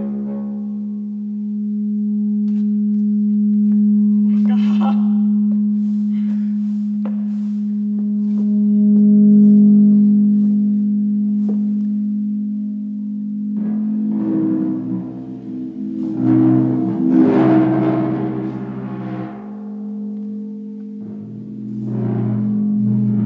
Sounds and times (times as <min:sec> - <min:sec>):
Gong: 0:00.0 - 0:23.2.